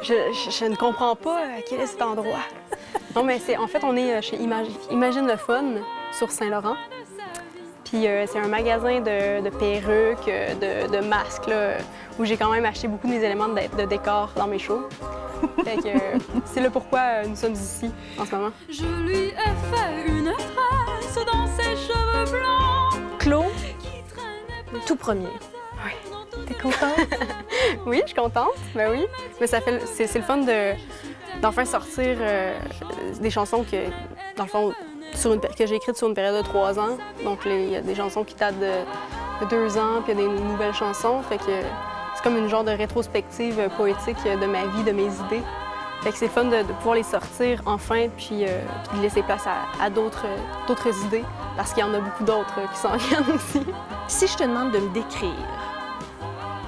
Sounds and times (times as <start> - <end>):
Speech: 0.0 - 6.8, 7.9 - 14.9, 15.6 - 20.1, 24.8 - 27.2, 27.8 - 30.8, 31.4 - 45.4, 46.1 - 55.5
Music: 0.0 - 56.6.